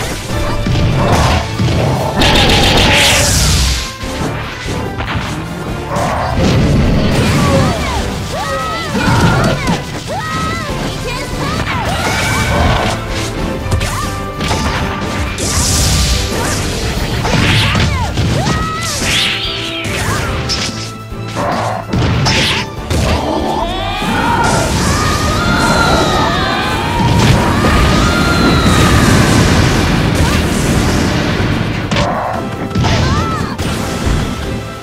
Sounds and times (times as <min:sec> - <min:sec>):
Music: 0:00.0 - 0:34.8.